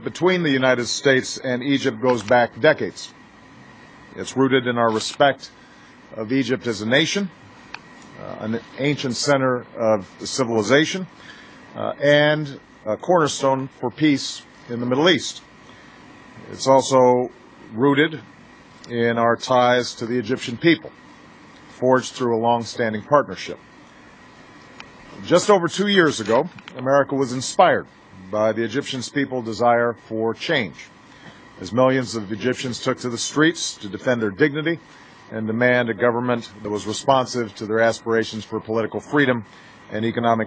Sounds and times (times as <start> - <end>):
Male speech, man speaking: 0.0 - 3.2, 4.2 - 5.5, 6.1 - 7.4, 8.2 - 11.1, 11.8 - 15.4, 16.4 - 18.3, 18.9 - 20.9, 21.8 - 23.6, 25.2 - 30.9, 31.6 - 40.4
Narration, monologue: 0.0 - 40.4.